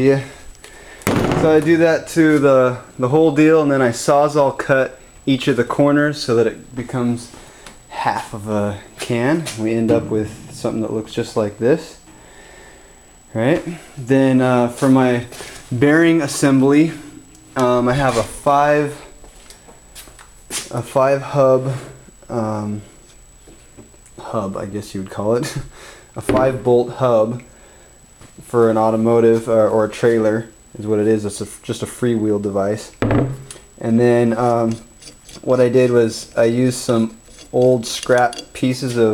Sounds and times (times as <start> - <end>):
Speech: 0.0 - 0.4, 1.3 - 12.0, 13.3 - 19.1, 20.6 - 22.9, 24.2 - 27.5, 28.4 - 33.0, 33.8 - 39.1.